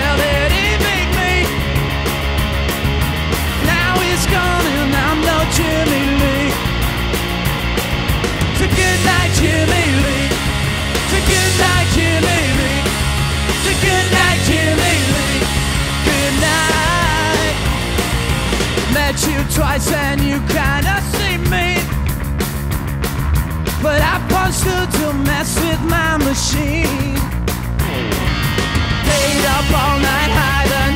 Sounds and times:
Independent music: 0:00.0 - 0:30.9.

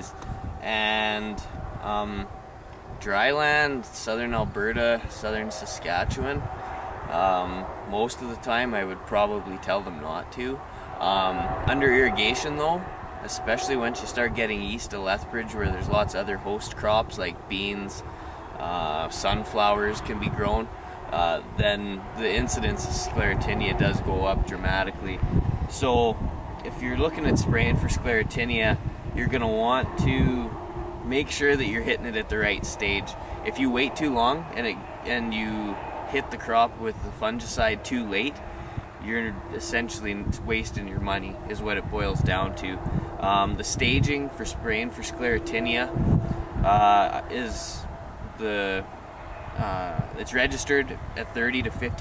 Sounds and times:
Speech: 0:00.0 - 0:02.3, 0:03.0 - 0:06.5, 0:07.1 - 0:18.0, 0:18.6 - 0:38.4, 0:39.0 - 0:46.0, 0:46.6 - 0:48.9, 0:49.6 - 0:52.0.

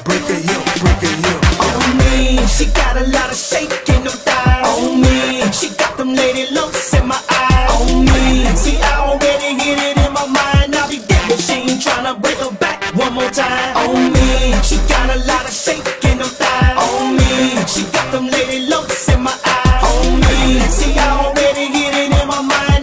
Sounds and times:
Hip hop music: 0:00.0 - 0:22.8.

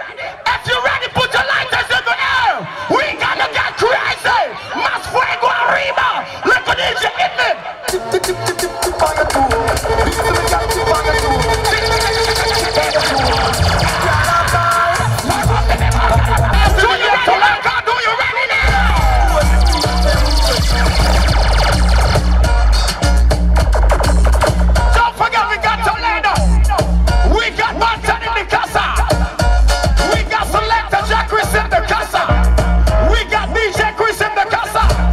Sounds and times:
Music: 0:07.8 - 0:17.6, 0:18.5 - 0:35.1.

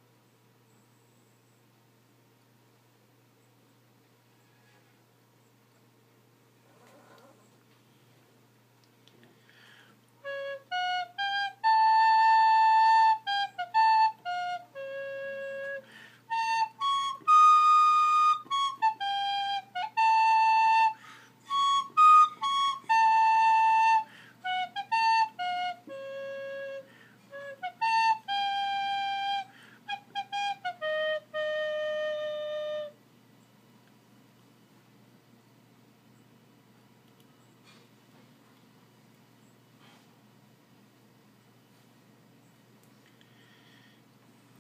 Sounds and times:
Flute: 0:10.2 - 0:33.0.

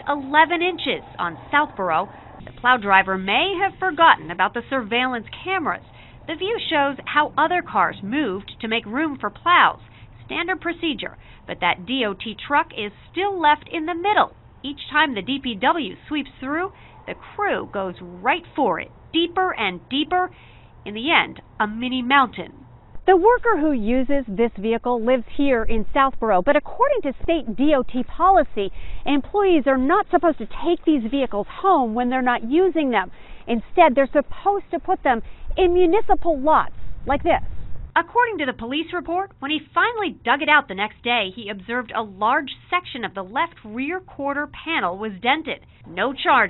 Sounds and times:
Speech: 0:00.0 - 0:37.4, 0:38.0 - 0:46.4.

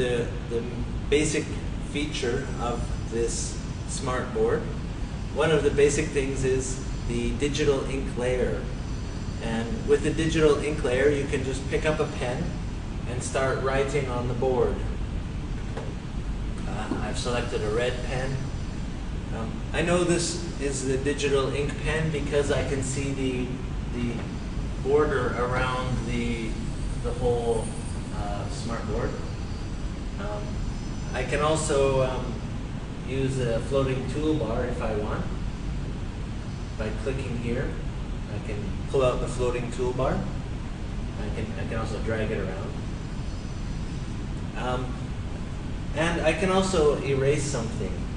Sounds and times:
Speech: 0:00.0 - 0:04.8, 0:05.4 - 0:08.8, 0:09.4 - 0:15.0, 0:16.6 - 0:18.5, 0:19.3 - 0:29.3, 0:30.2 - 0:32.4, 0:33.0 - 0:35.4, 0:36.8 - 0:40.4, 0:41.2 - 0:42.8, 0:44.6 - 0:45.1, 0:45.9 - 0:48.1.

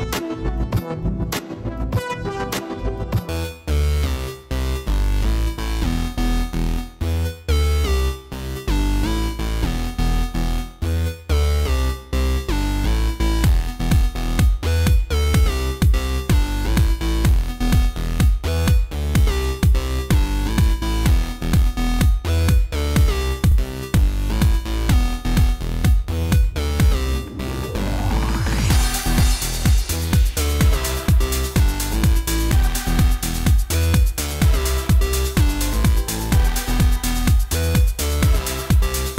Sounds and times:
Music: 0:00.0 - 0:39.1.

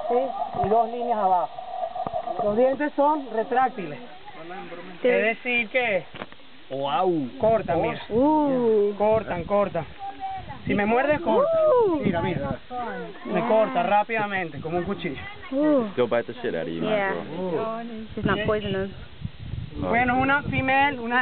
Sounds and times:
Outside, rural or natural: 0:00.0 - 0:21.2.

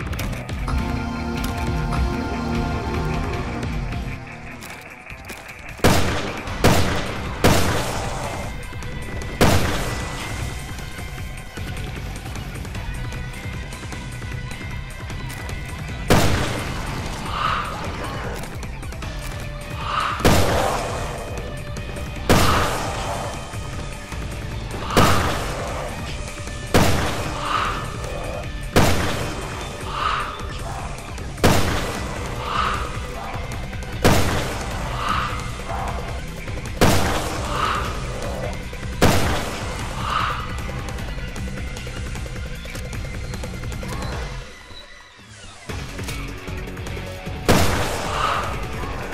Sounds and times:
Music: 0:00.0 - 0:49.1.

